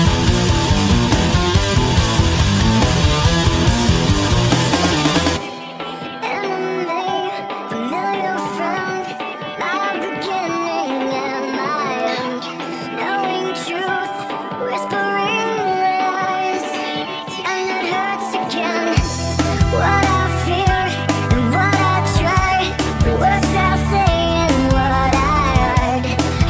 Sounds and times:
Music: 0.0 - 26.4.

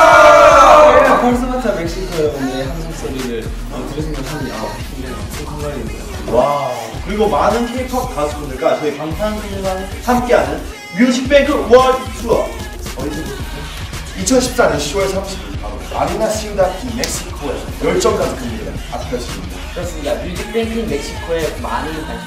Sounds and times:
Music: 0.0 - 22.2
Speech: 0.9 - 13.4, 14.2 - 22.2.

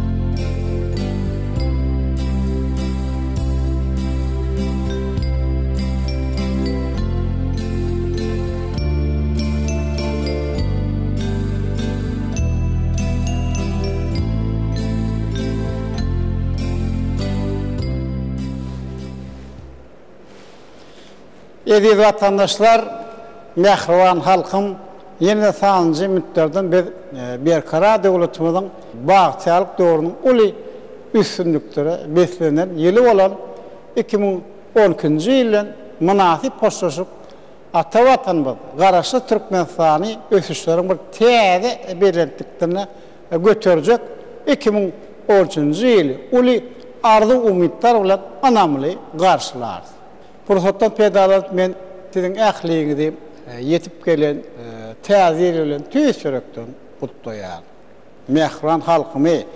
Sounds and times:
Music: 0.0 - 20.0.

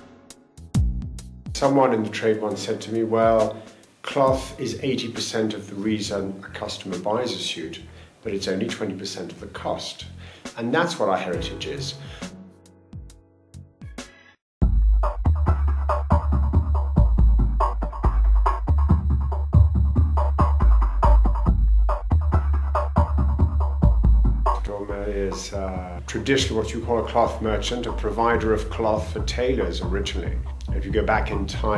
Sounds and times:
Music: 0.0 - 31.7
Speech: 1.6 - 12.0, 24.6 - 31.7.

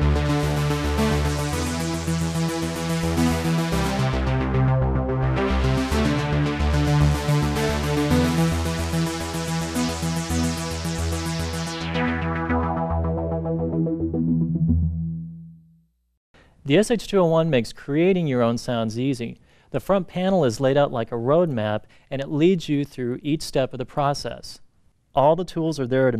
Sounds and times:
Sampler: 0.0 - 15.7
Speech: 16.6 - 24.6, 25.2 - 26.1.

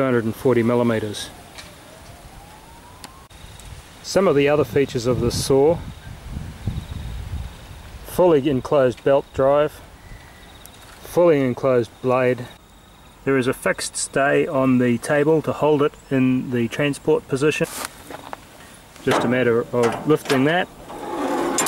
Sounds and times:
Speech: 0.0 - 1.4, 4.0 - 5.9, 8.1 - 9.8, 11.0 - 12.6, 13.2 - 17.8, 19.0 - 20.8.

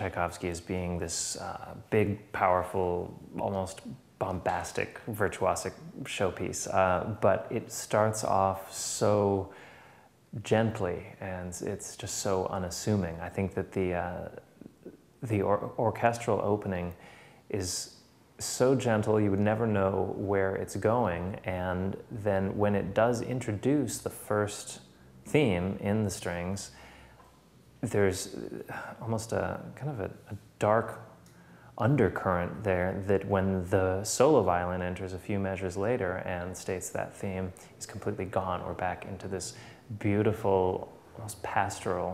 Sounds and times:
Speech: 0.0 - 9.6, 10.3 - 26.8, 27.8 - 31.2, 31.8 - 42.1.

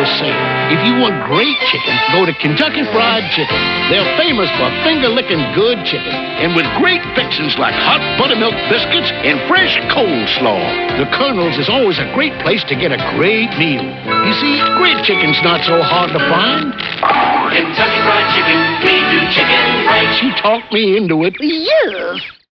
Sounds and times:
Speech: 0.0 - 16.8, 20.2 - 22.3
Music: 0.0 - 20.9.

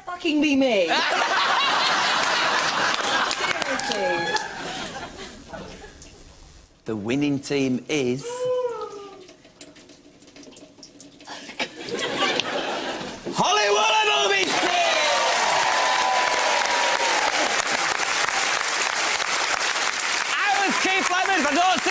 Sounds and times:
Water: 1.6 - 13.9.

